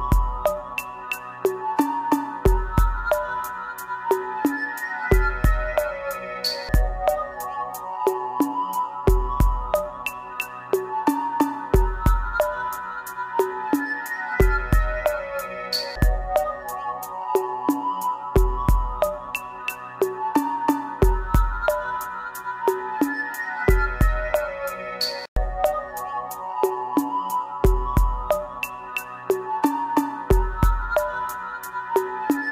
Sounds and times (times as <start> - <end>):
Music: 0.0 - 32.5.